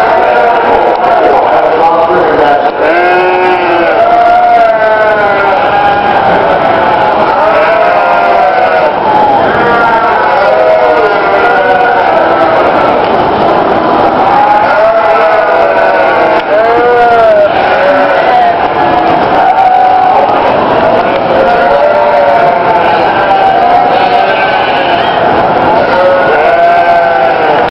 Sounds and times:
Bleat: 0.0 - 0.8, 2.8 - 9.0, 9.6 - 13.0, 14.3 - 18.6, 20.9 - 27.7.

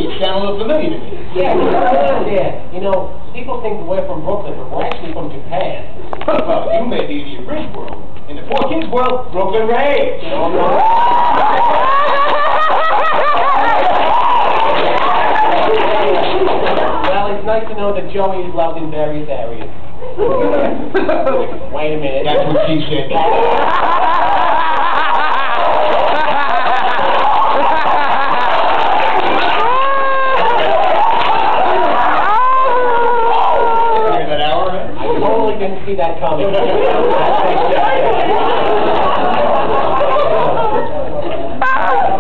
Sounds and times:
Crowd: 0.0 - 19.0, 19.6 - 42.2.

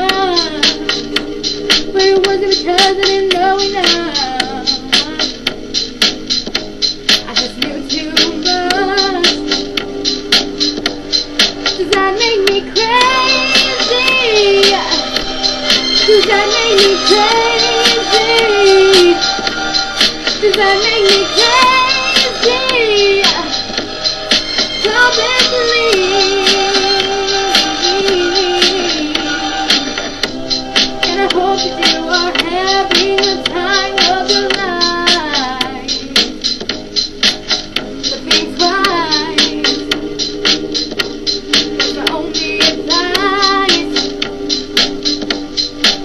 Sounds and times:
Female singing: 0.0 - 0.8, 2.0 - 5.3, 7.3 - 9.5, 11.8 - 15.2, 16.1 - 19.2, 20.4 - 23.6, 24.8 - 29.3, 31.0 - 36.1, 38.2 - 39.9, 42.0 - 44.0
Music: 0.0 - 46.0.

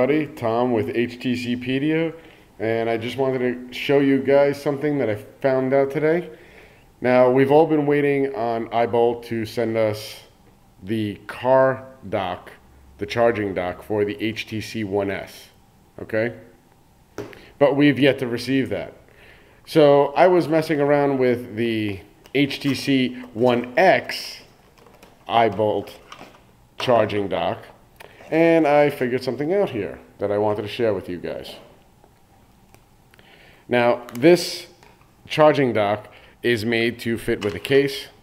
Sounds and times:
Speech: 0.0 - 6.4, 7.0 - 16.6, 17.6 - 19.0, 19.7 - 24.5, 25.3 - 26.0, 26.8 - 31.8, 33.7 - 38.2.

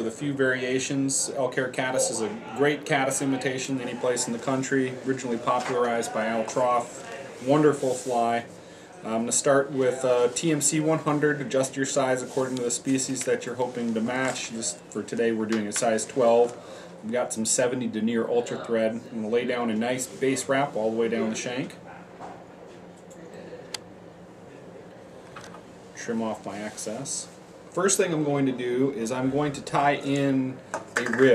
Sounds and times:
Speech: 0.0 - 21.8, 26.0 - 31.3.

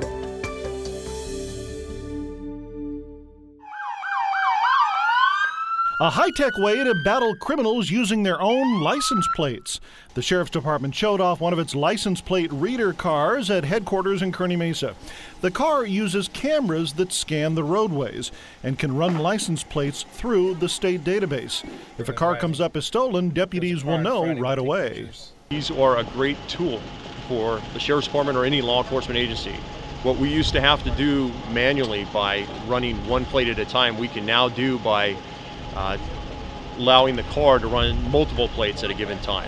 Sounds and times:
Speech: 6.0 - 35.2, 35.8 - 36.1, 36.8 - 39.4
Vehicle: 9.7 - 39.4.

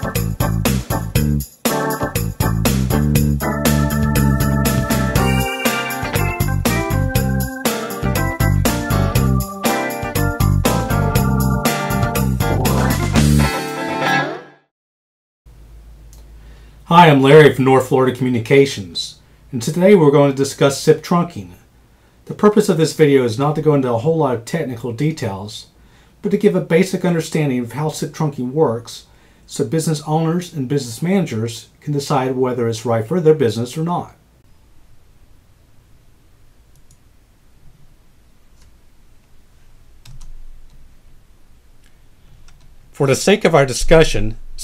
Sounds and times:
Electric guitar: 0.0 - 14.4.

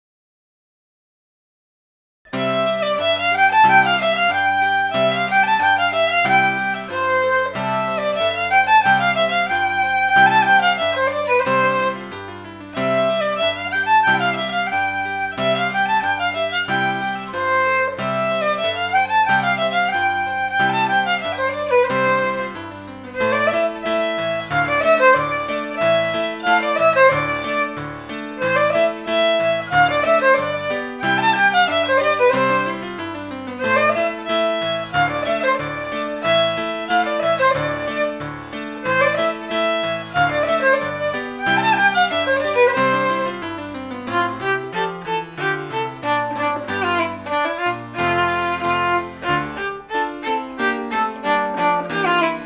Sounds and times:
Violin, fiddle: 2.3 - 52.4.

